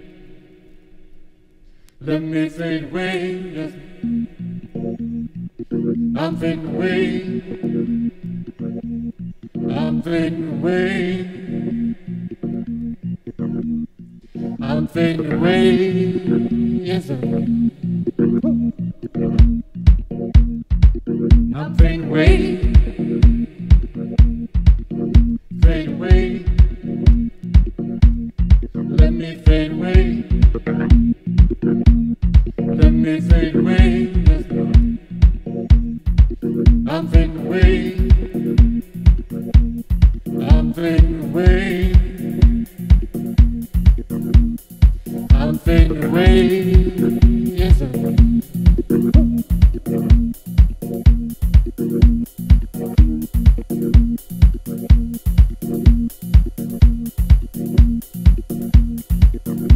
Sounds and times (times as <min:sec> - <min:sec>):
Music: 0:00.0 - 0:59.7.